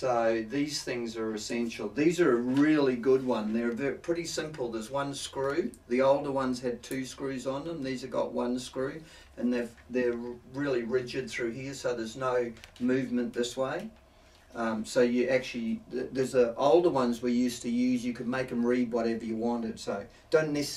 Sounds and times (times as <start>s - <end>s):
Speech: 0.0s - 20.7s.